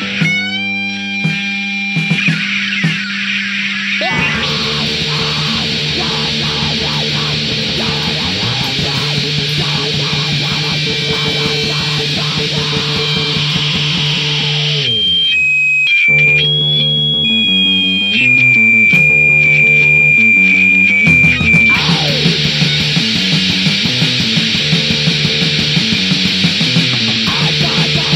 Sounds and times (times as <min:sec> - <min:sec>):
Music: 0:00.0 - 0:28.1.